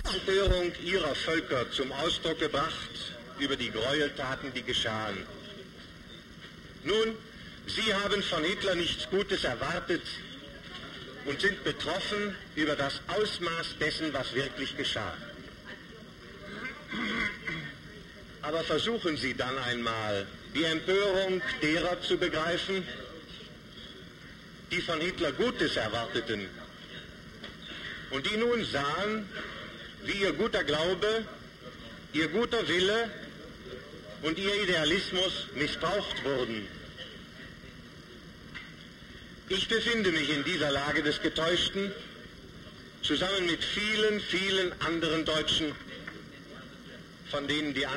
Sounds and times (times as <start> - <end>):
Speech: 0.0 - 5.9, 6.8 - 24.1, 24.7 - 27.2, 28.1 - 38.3, 39.5 - 47.9.